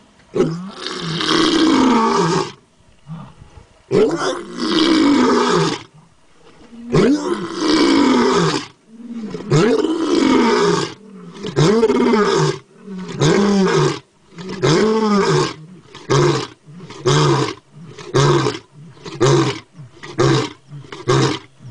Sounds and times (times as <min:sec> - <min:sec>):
Roar: 0:00.4 - 0:06.0, 0:06.7 - 0:21.7.